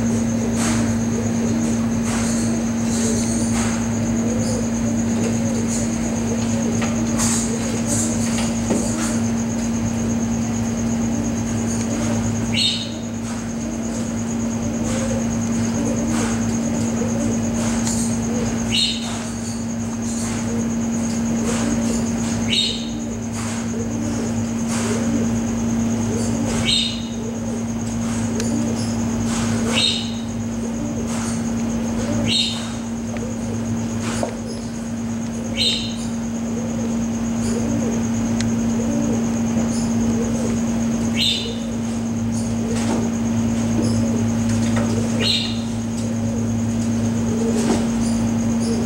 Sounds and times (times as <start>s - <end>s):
Snake: 0.0s - 48.8s.